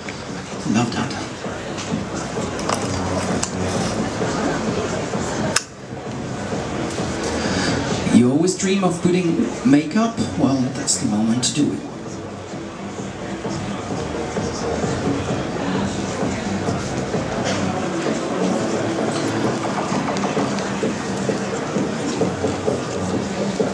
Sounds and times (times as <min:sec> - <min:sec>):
Music: 0:00.0 - 0:23.7
Speech: 0:00.6 - 0:05.5, 0:08.1 - 0:12.3.